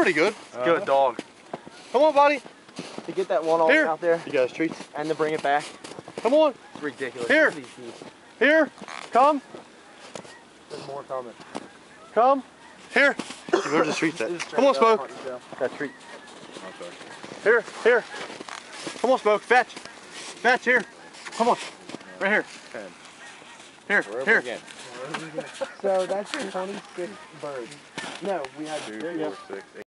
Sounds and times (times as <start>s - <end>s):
Honk: 5.6s - 7.6s, 8.2s - 18.9s, 19.8s - 28.3s, 29.1s - 29.8s
Speech: 23.9s - 29.8s.